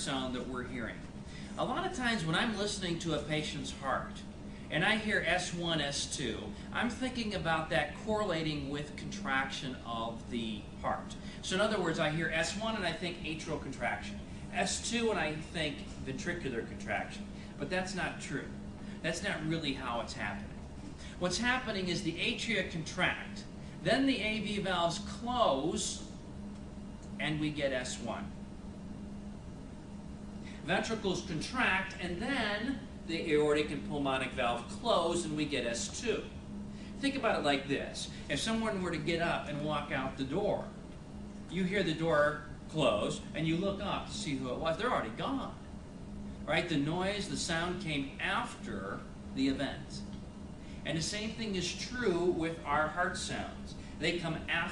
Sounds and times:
Speech: 0:00.0 - 0:20.6, 0:21.2 - 0:26.1, 0:27.2 - 0:28.4, 0:30.6 - 0:36.4, 0:37.0 - 0:40.8, 0:41.5 - 0:45.6, 0:46.5 - 0:50.1, 0:50.8 - 0:54.7.

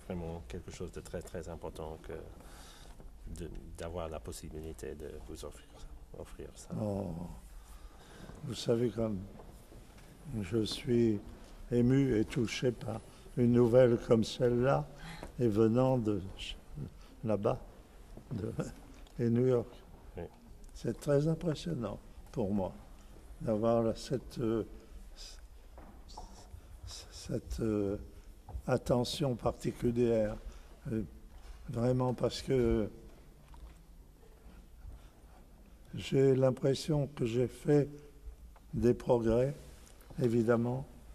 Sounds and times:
Speech: 0:00.0 - 0:02.4, 0:03.3 - 0:07.5, 0:08.4 - 0:09.3, 0:10.3 - 0:17.6, 0:18.3 - 0:22.8, 0:23.4 - 0:25.4, 0:26.1 - 0:28.1, 0:28.7 - 0:33.0, 0:35.9 - 0:38.0, 0:38.8 - 0:40.9.

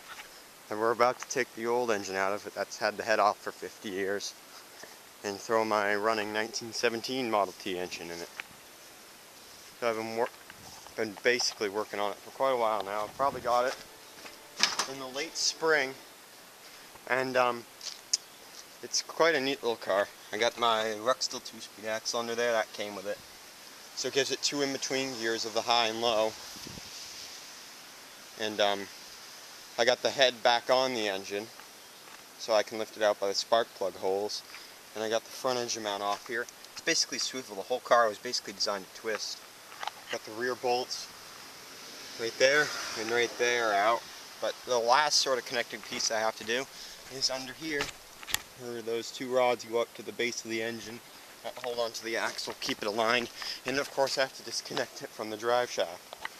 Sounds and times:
Speech: 0:00.7 - 0:04.4, 0:05.2 - 0:08.3, 0:09.8 - 0:10.3, 0:11.0 - 0:13.8, 0:14.7 - 0:16.0, 0:17.0 - 0:17.7, 0:18.8 - 0:23.2, 0:24.0 - 0:26.4, 0:28.4 - 0:28.9, 0:29.8 - 0:31.5, 0:32.4 - 0:39.4, 0:40.1 - 0:41.1, 0:42.2 - 0:47.9, 0:48.6 - 0:56.0.

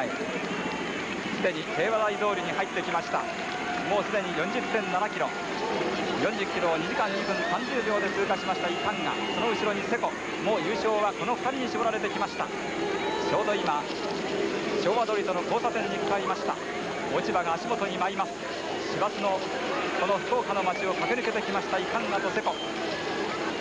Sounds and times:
Outside, urban or manmade: 0:00.0 - 0:23.6
Speech: 0:01.4 - 0:05.3, 0:06.1 - 0:12.5, 0:14.8 - 0:22.6.

